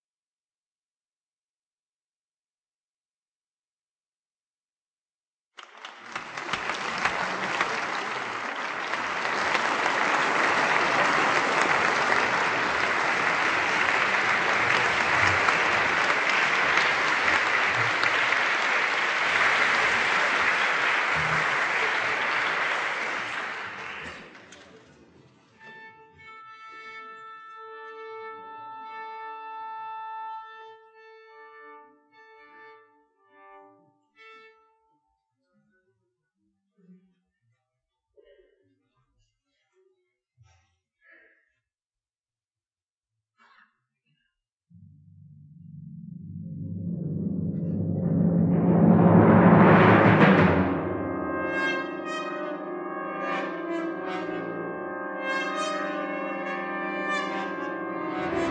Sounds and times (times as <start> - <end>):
Orchestra: 5.6 - 34.9, 44.8 - 58.5.